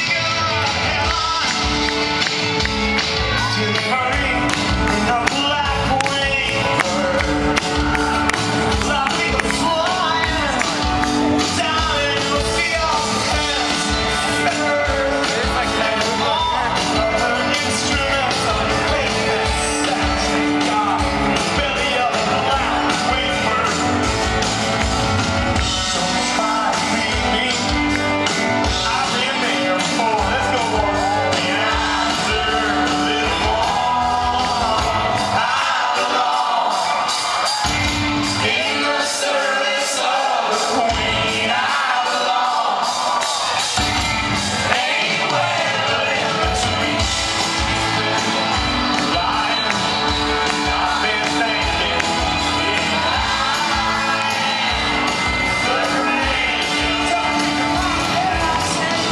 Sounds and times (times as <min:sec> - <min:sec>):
Music: 0:00.0 - 0:59.1.